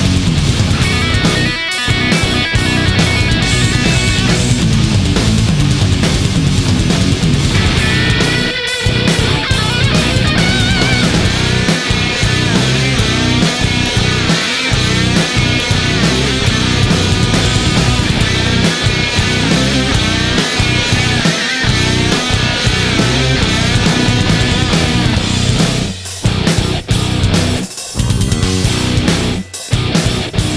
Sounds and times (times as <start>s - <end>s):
Heavy metal: 0.0s - 30.5s.